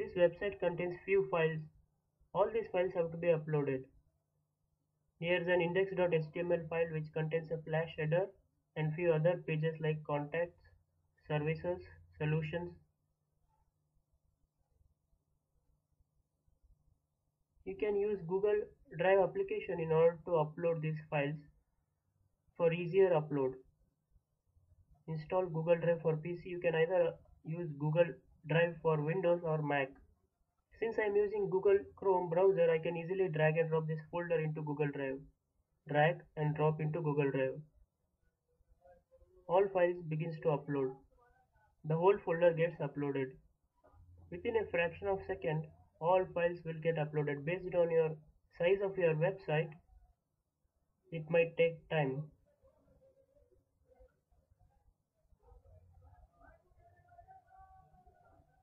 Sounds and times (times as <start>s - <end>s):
Speech: 0.0s - 1.7s, 2.4s - 3.9s, 5.2s - 10.6s, 11.2s - 12.8s, 17.7s - 21.5s, 22.6s - 23.6s, 25.1s - 30.0s, 30.8s - 35.3s, 35.9s - 37.6s, 39.5s - 41.3s, 41.9s - 43.4s, 44.3s - 49.8s, 51.2s - 52.4s.